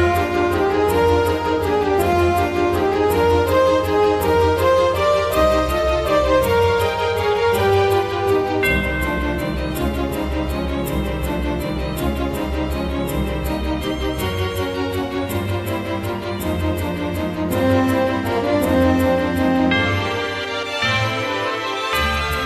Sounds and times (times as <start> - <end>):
Music: 0.0 - 22.4.